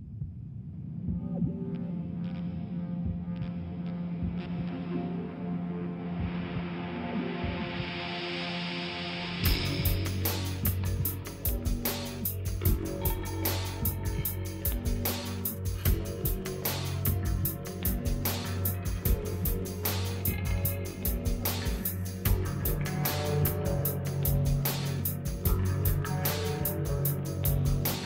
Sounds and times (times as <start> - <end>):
Scary music: 0.7 - 28.0.